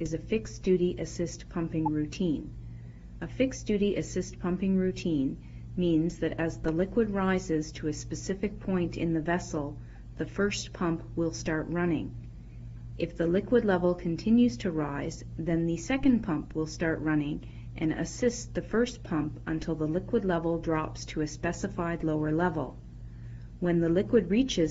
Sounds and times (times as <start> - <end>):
Speech: 0.0 - 2.6, 3.2 - 12.2, 13.0 - 22.8, 23.6 - 24.7.